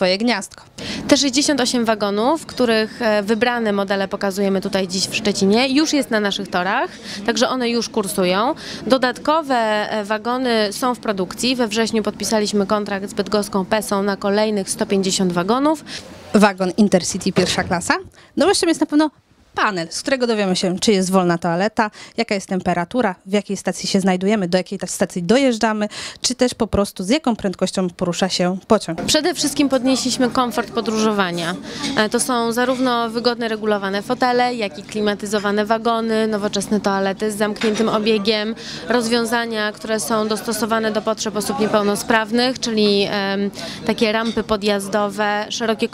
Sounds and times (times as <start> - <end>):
Speech: 0.0 - 45.9.